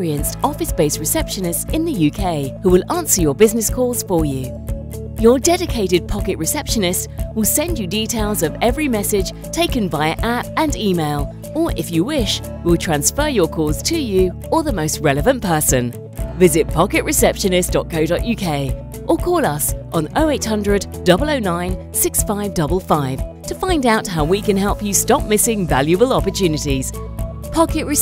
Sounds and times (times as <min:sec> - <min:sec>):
Speech: 0:00.0 - 0:04.5, 0:05.2 - 0:27.0, 0:27.6 - 0:28.0
Music: 0:00.0 - 0:28.0.